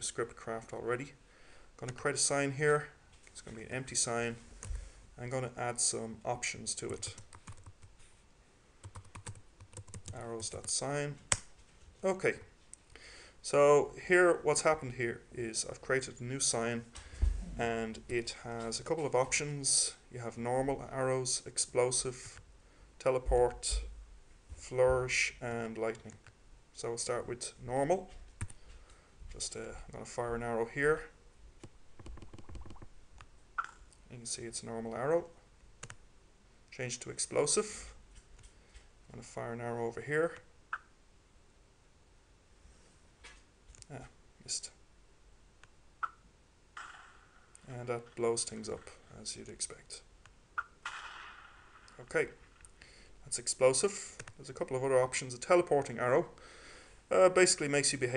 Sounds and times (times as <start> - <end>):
Speech: 0.0 - 1.2, 1.8 - 4.4, 5.2 - 7.2, 10.1 - 11.2, 12.0 - 12.5, 13.4 - 16.9, 17.6 - 22.4, 23.0 - 23.9, 24.6 - 26.2, 26.8 - 28.2, 29.3 - 31.2, 34.1 - 35.4, 36.7 - 38.0, 39.1 - 40.4, 43.8 - 44.8, 47.6 - 50.1, 52.0 - 52.4, 53.2 - 56.4, 57.1 - 58.1.